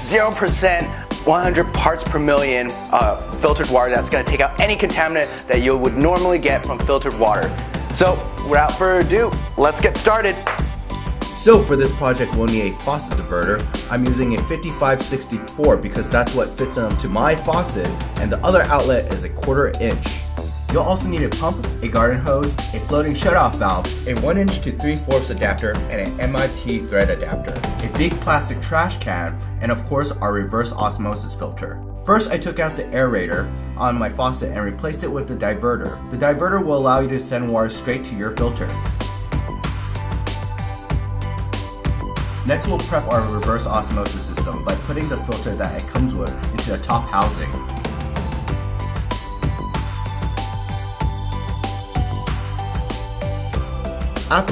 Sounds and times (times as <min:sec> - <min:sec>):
Speech: 0:00.0 - 0:10.4, 0:11.4 - 0:38.8, 0:42.5 - 0:47.6, 0:54.3 - 0:54.5
Music: 0:00.0 - 0:54.5.